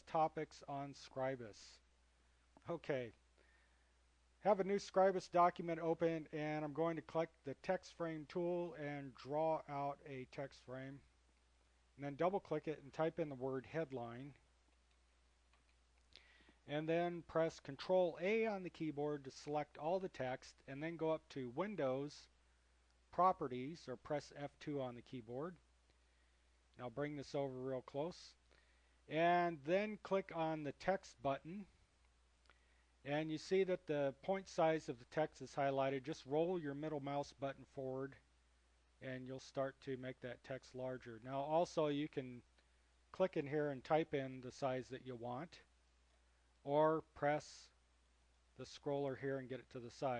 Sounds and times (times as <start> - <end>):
Speech: 0.0 - 1.9, 2.6 - 3.2, 4.4 - 11.1, 12.0 - 14.4, 16.6 - 22.3, 23.1 - 25.6, 26.8 - 28.4, 29.1 - 31.8, 33.0 - 38.3, 39.0 - 42.5, 43.1 - 45.7, 46.6 - 47.8, 48.6 - 50.1.